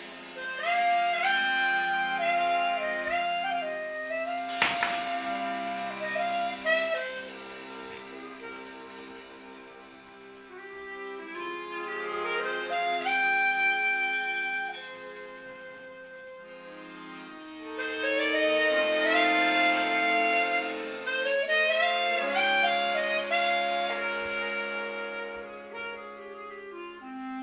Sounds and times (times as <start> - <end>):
Saxophone: 0.0 - 27.4.